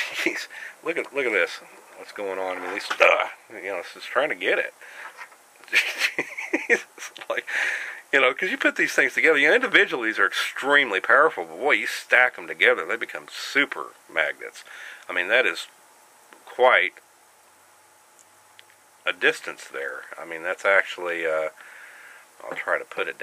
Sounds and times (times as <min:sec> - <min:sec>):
Speech: 0:00.0 - 0:04.8, 0:07.1 - 0:07.5, 0:08.1 - 0:15.8, 0:16.4 - 0:17.0, 0:19.1 - 0:21.6, 0:22.4 - 0:23.2
Inside, small room: 0:00.0 - 0:23.2.